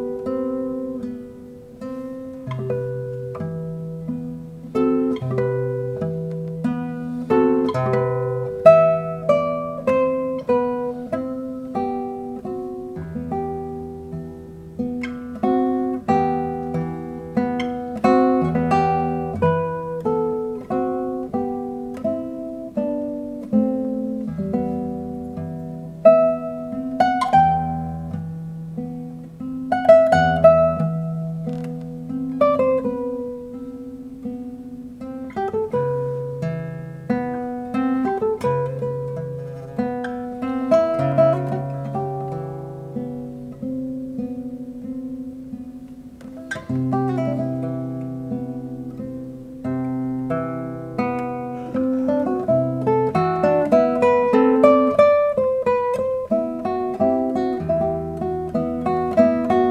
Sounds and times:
Electric guitar: 0.0s - 59.7s
Strum: 0.0s - 59.7s.

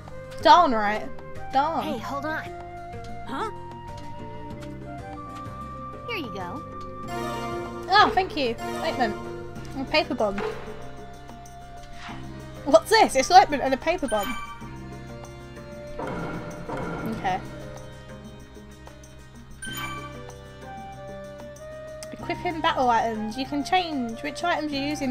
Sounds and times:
Music: 0.0s - 25.1s
Speech: 0.4s - 2.5s, 6.1s - 6.6s, 7.9s - 9.2s, 9.8s - 10.4s, 12.7s - 14.3s, 22.0s - 25.1s.

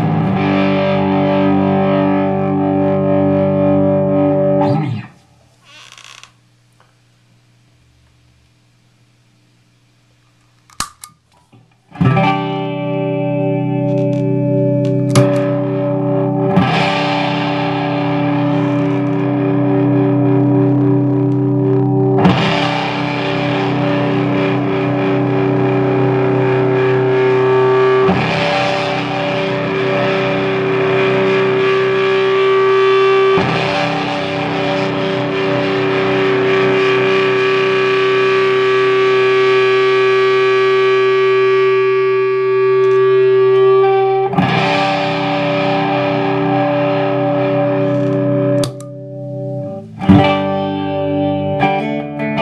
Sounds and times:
Guitar: 0.0s - 7.0s, 10.2s - 52.4s
Distortion: 0.0s - 52.4s
Effects unit: 0.0s - 52.4s.

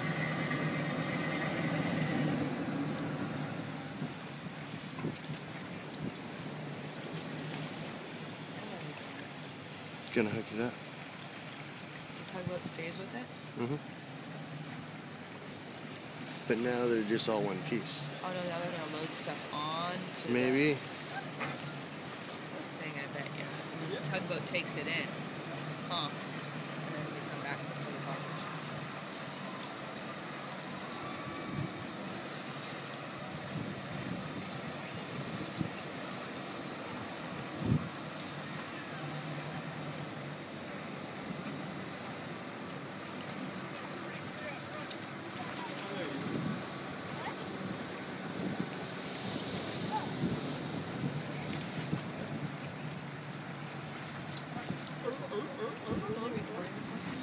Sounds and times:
Boat, Water vehicle: 0.0s - 57.2s.

